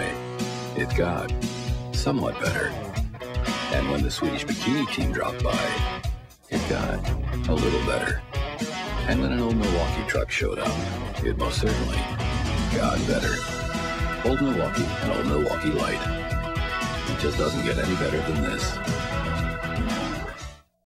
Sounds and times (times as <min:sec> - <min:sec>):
Speech: 0:00.0 - 0:00.2, 0:00.8 - 0:01.4, 0:02.0 - 0:02.9, 0:03.7 - 0:05.9, 0:06.5 - 0:08.2, 0:09.0 - 0:12.1, 0:12.7 - 0:13.4, 0:14.2 - 0:16.1, 0:17.1 - 0:18.8
Music: 0:00.0 - 0:20.8.